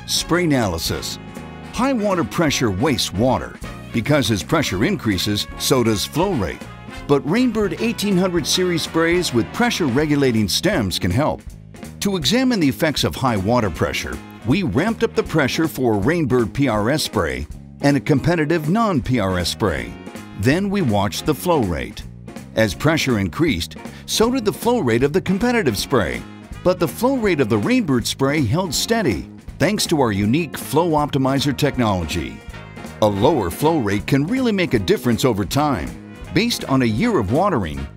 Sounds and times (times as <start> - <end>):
Speech: 0.0 - 32.4, 33.0 - 37.9
Music: 0.0 - 37.9.